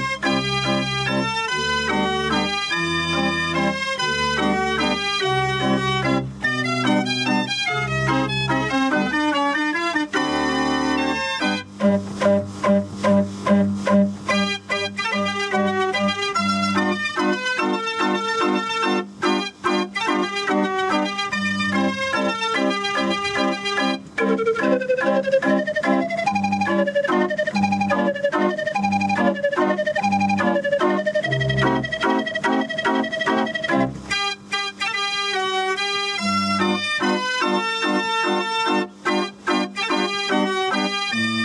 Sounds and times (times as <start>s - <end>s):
Organ: 0.0s - 41.4s.